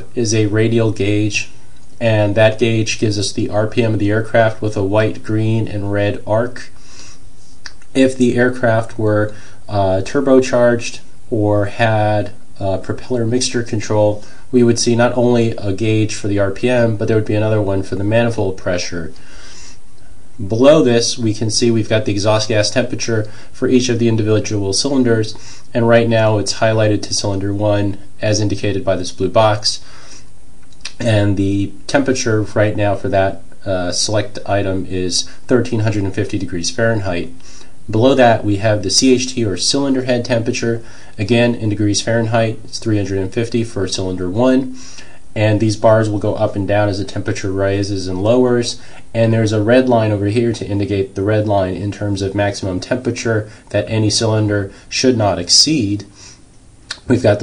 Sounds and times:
Speech: 0:00.0 - 0:06.8, 0:07.7 - 0:19.2, 0:20.4 - 0:29.9, 0:30.8 - 0:56.2, 0:56.9 - 0:57.4.

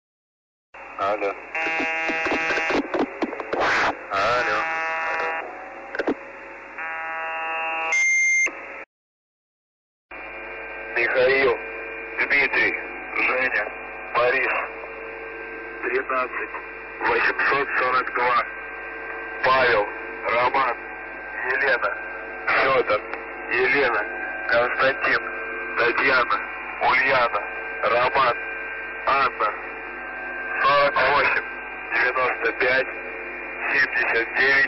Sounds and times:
Speech: 0:01.0 - 0:01.4, 0:04.1 - 0:05.4, 0:10.9 - 0:11.6, 0:12.2 - 0:14.8, 0:15.8 - 0:18.5, 0:19.4 - 0:28.4, 0:29.0 - 0:29.7, 0:30.5 - 0:33.0, 0:33.6 - 0:34.6
Buzzer: 0:01.6 - 0:02.8, 0:04.4 - 0:05.5, 0:06.8 - 0:08.6.

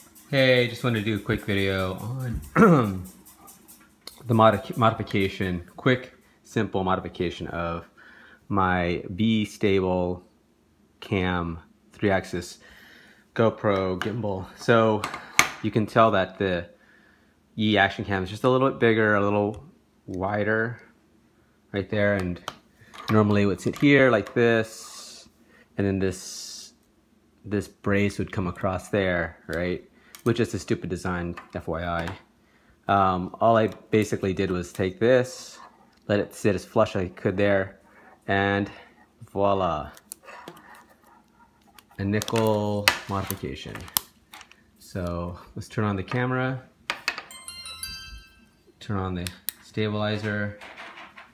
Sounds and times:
Speech: 0:00.3 - 0:03.1, 0:04.2 - 0:07.9, 0:08.5 - 0:10.3, 0:11.0 - 0:12.6, 0:13.4 - 0:16.8, 0:17.6 - 0:20.9, 0:21.7 - 0:22.5, 0:23.1 - 0:26.8, 0:27.4 - 0:32.3, 0:32.9 - 0:40.0, 0:42.0 - 0:44.0, 0:44.8 - 0:46.7, 0:48.8 - 0:50.6.

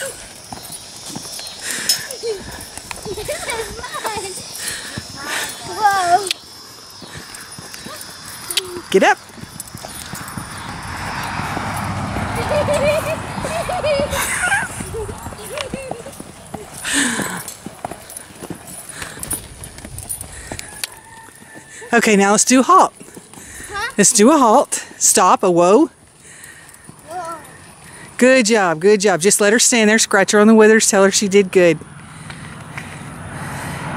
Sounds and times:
Clip-clop: 0:00.0 - 0:33.9.

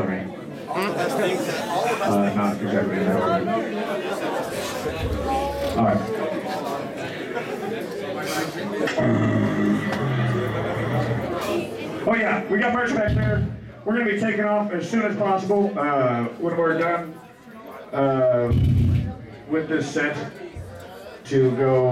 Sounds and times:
Speech: 0:00.0 - 0:09.2, 0:11.0 - 0:21.9.

